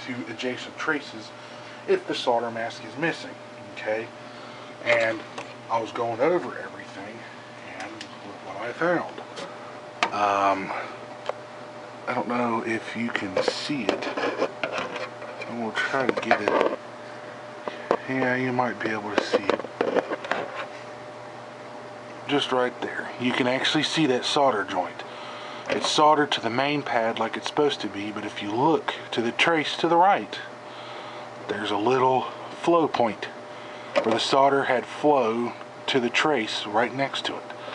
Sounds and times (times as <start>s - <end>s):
Speech: 0.0s - 4.2s, 4.8s - 9.2s, 10.1s - 10.9s, 12.1s - 14.2s, 15.4s - 16.8s, 18.0s - 19.6s, 22.3s - 25.1s, 25.7s - 30.5s, 31.5s - 33.4s, 34.0s - 37.5s.